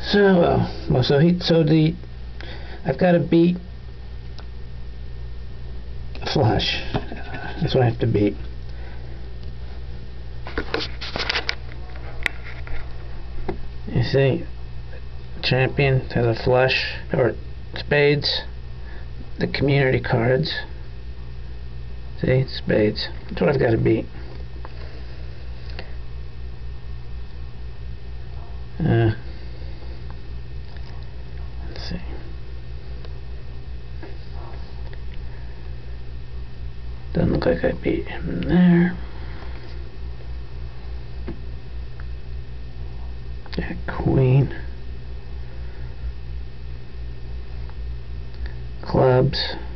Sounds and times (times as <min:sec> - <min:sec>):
Speech: 0:00.0 - 0:02.0, 0:02.8 - 0:03.7, 0:06.2 - 0:08.5, 0:13.9 - 0:14.5, 0:15.4 - 0:18.6, 0:19.4 - 0:20.8, 0:22.2 - 0:24.2, 0:28.4 - 0:29.3, 0:31.6 - 0:32.3, 0:37.1 - 0:39.0, 0:43.5 - 0:44.8, 0:48.8 - 0:49.7
Inside, small room: 0:00.0 - 0:49.7.